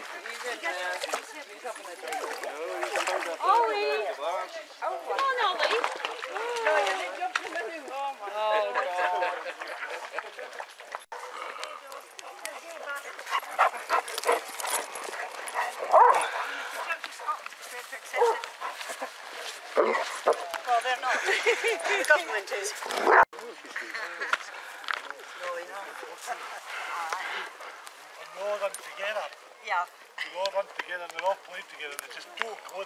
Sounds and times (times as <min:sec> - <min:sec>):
Outside, rural or natural: 0:00.0 - 0:32.8
Canidae, dogs, wolves: 0:09.5 - 0:12.2, 0:13.0 - 0:17.2, 0:18.1 - 0:20.6, 0:22.8 - 0:23.3.